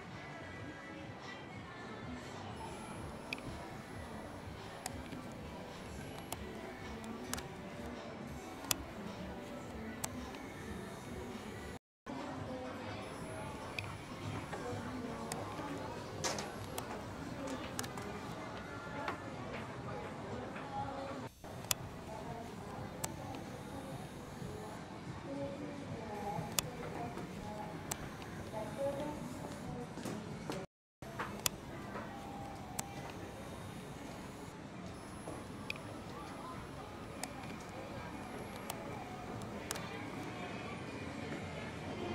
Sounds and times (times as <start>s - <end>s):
Speech: 0.0s - 42.1s.